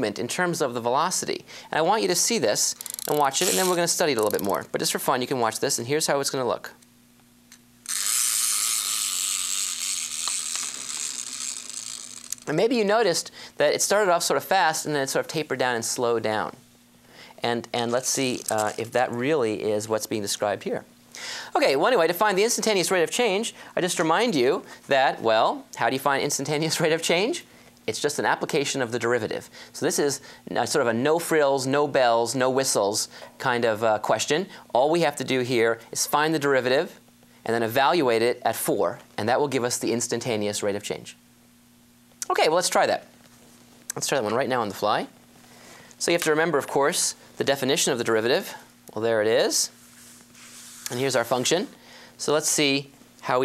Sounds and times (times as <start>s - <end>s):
Electric shaver, electric razor: 7.9s - 12.4s.